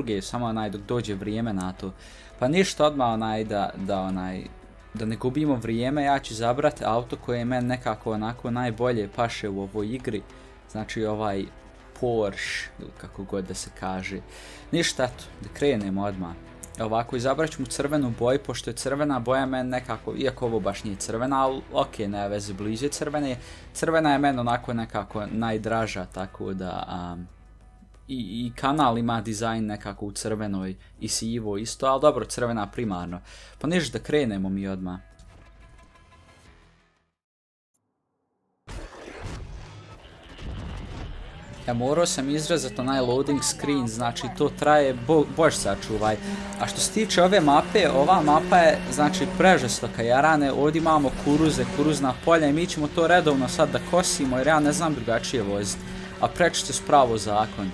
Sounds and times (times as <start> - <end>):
Speech: 0.0 - 27.3, 28.1 - 35.0, 41.6 - 57.7
Music: 0.0 - 37.2, 38.9 - 57.7.